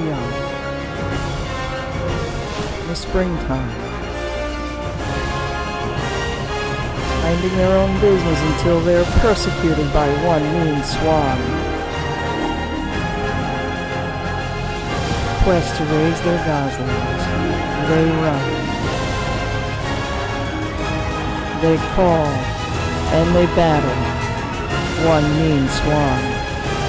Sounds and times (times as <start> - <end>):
Speech: 0.0 - 0.4, 2.9 - 3.8, 7.2 - 11.6, 15.4 - 18.6, 21.6 - 22.5, 23.1 - 24.1, 25.0 - 26.4
Theme music: 0.0 - 26.8.